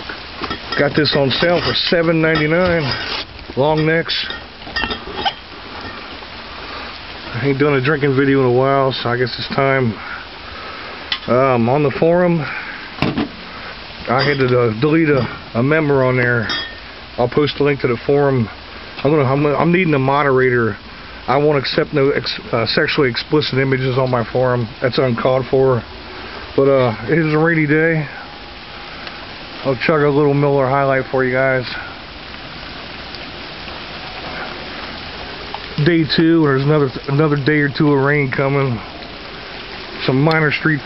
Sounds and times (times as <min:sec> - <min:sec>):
Rain on surface: 0:00.0 - 0:40.8
Speech: 0:00.8 - 0:03.0, 0:03.6 - 0:04.4, 0:07.3 - 0:10.0, 0:11.3 - 0:12.6, 0:14.1 - 0:16.5, 0:17.2 - 0:25.8, 0:26.6 - 0:28.2, 0:29.6 - 0:31.9, 0:35.8 - 0:38.8, 0:40.0 - 0:40.8.